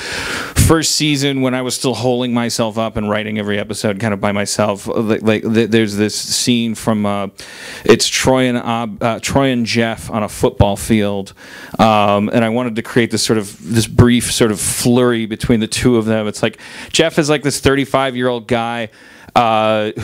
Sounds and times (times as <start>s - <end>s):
Speech: 0.6s - 20.0s.